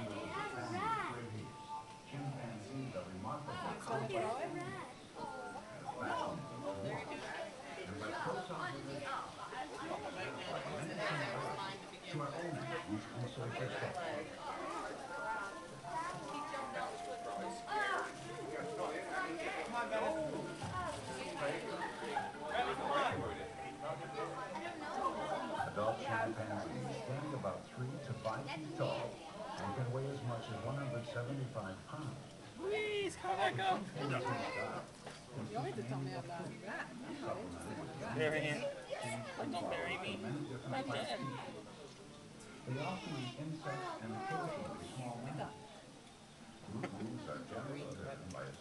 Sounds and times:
Music: 0.3s - 2.9s, 15.8s - 26.0s.

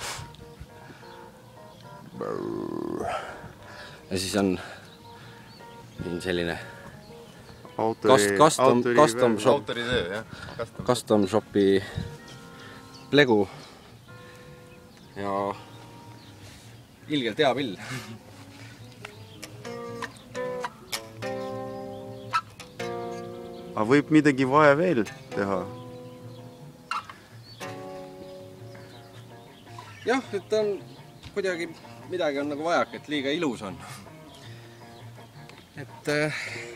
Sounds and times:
Guitar: 0.0s - 36.7s.

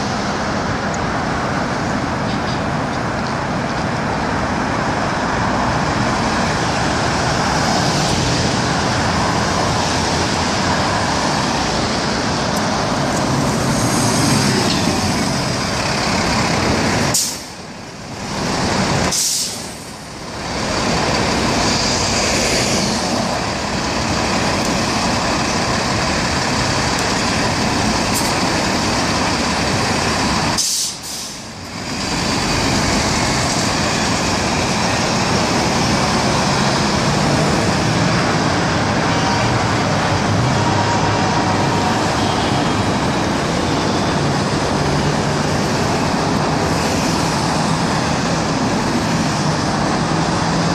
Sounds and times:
Vehicle: 0.0s - 50.7s.

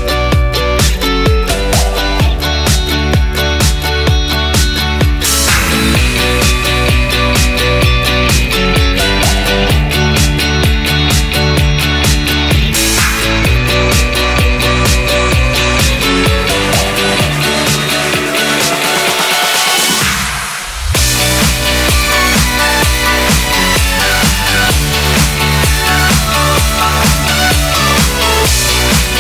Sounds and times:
Music: 0.0s - 29.2s.

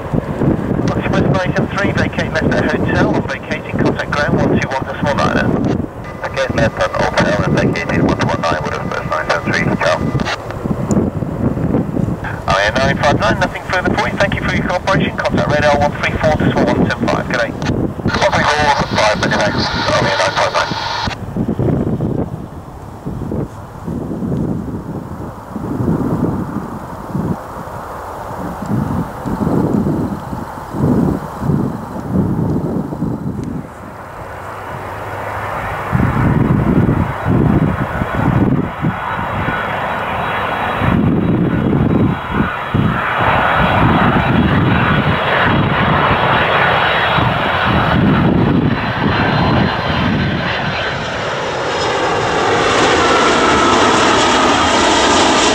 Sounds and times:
Aircraft engine: 0.0s - 55.5s
Fixed-wing aircraft, airplane: 0.0s - 55.5s
Outside, urban or manmade: 0.0s - 55.5s.

